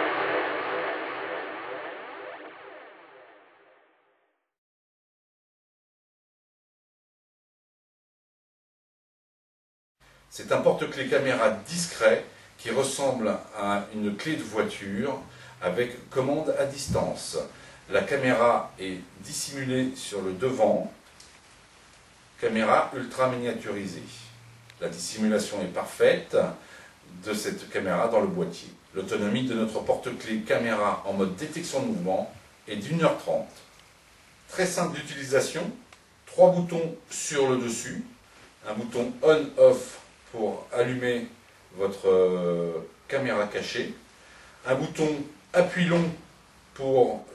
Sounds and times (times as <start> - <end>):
Speech: 10.3 - 21.0, 22.4 - 33.7, 34.5 - 47.3.